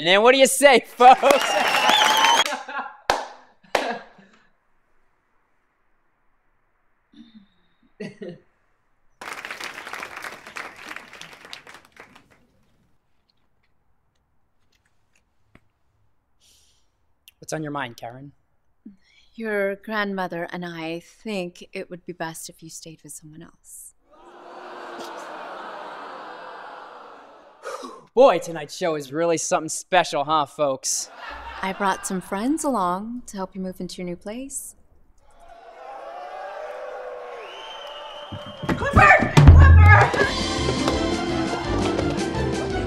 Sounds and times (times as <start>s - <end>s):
Conversation: 0.0s - 1.2s, 28.2s - 34.7s.